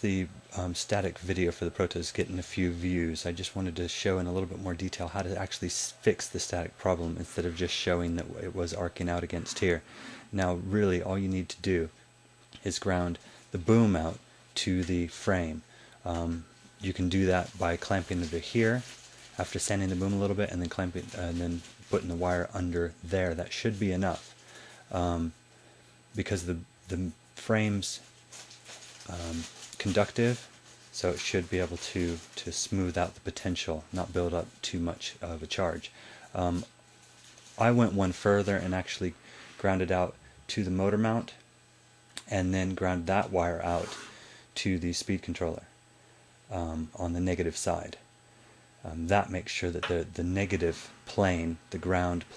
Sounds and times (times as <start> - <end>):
Speech: 0.0 - 12.0, 12.6 - 24.3, 24.9 - 25.4, 26.1 - 28.1, 29.0 - 36.7, 37.6 - 41.5, 42.2 - 44.0, 44.6 - 45.7, 46.5 - 48.0, 48.8 - 52.3.